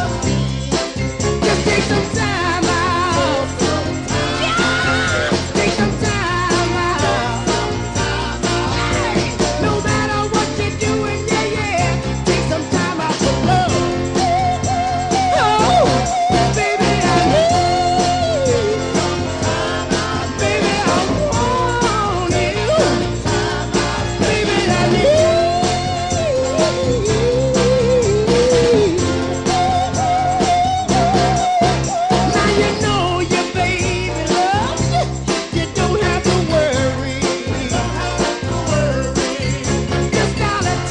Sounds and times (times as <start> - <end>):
Ska: 0.0 - 40.9.